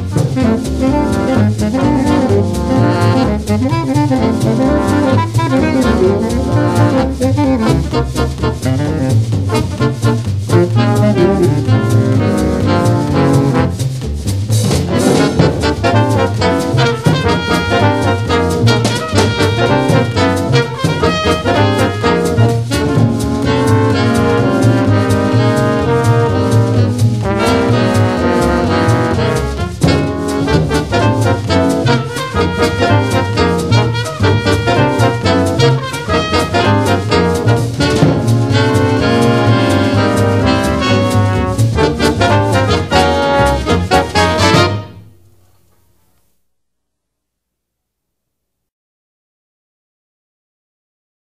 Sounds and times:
Saxophone: 0.0s - 14.0s, 14.9s - 45.2s
Trombone: 0.0s - 45.9s.

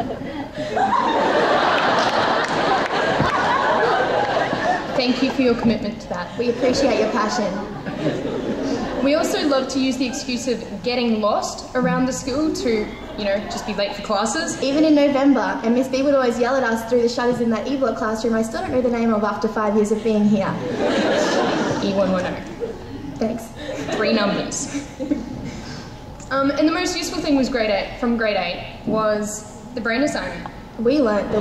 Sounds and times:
Narration, monologue: 4.8s - 31.4s
Female speech, woman speaking: 5.0s - 7.8s, 9.0s - 20.8s, 21.7s - 22.6s, 23.2s - 24.8s, 26.2s - 31.4s.

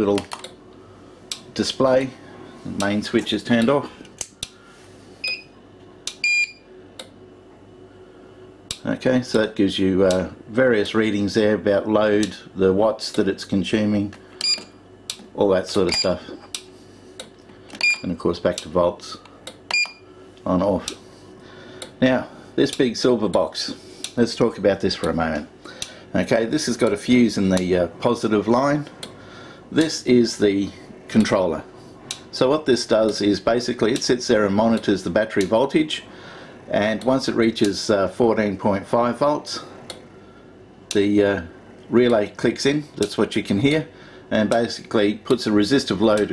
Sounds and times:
Speech: 0.0s - 0.4s, 1.6s - 4.0s, 8.8s - 14.2s, 15.3s - 16.4s, 18.0s - 19.3s, 20.4s - 21.0s, 22.0s - 25.5s, 26.1s - 29.0s, 29.7s - 31.7s, 32.3s - 36.1s, 36.7s - 39.7s, 40.9s - 46.3s.

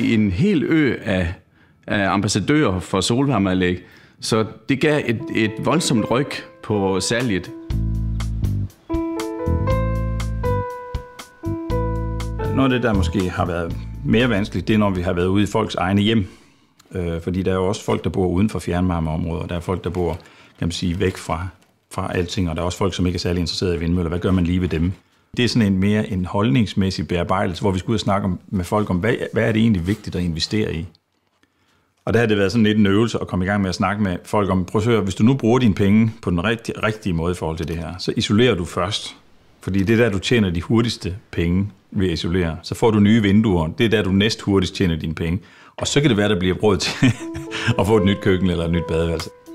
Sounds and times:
Speech: 0.0s - 7.6s, 12.6s - 31.0s, 32.0s - 49.4s.

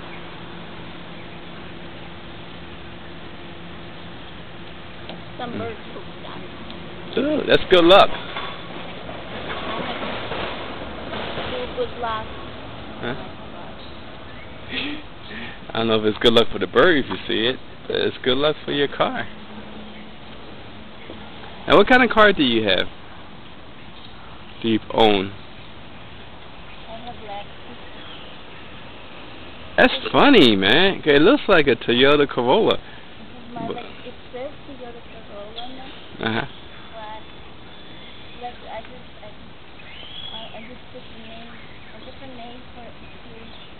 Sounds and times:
Vehicle: 0.0s - 43.7s.

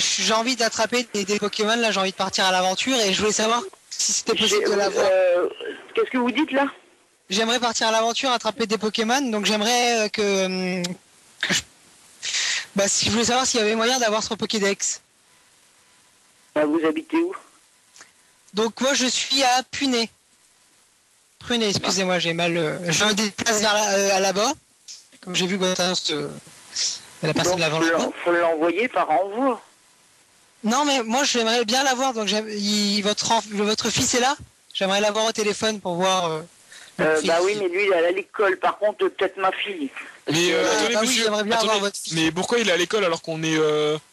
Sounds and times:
Radio: 0.0s - 6.9s, 16.5s - 17.6s, 24.9s - 29.7s, 36.9s - 44.0s
Speech: 0.0s - 11.7s, 12.8s - 15.0s, 21.4s - 29.7s, 30.6s - 44.0s.

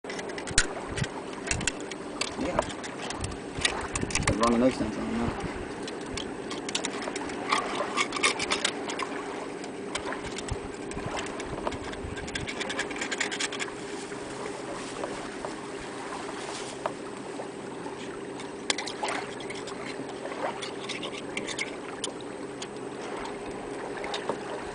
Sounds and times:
Speech: 2.4s - 2.7s, 4.3s - 5.4s.

